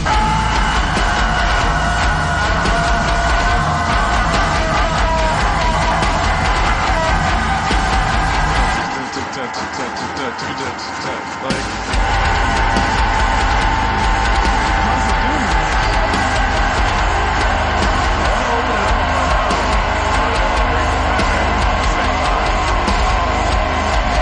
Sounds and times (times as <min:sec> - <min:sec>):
Music: 0:00.0 - 0:24.2
Speech: 0:08.8 - 0:11.7, 0:14.9 - 0:16.2, 0:18.2 - 0:23.0.